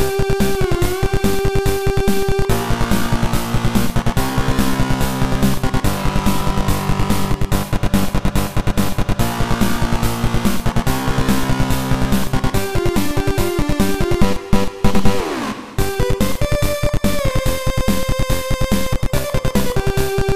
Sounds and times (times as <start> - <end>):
Music: 0.0 - 20.3.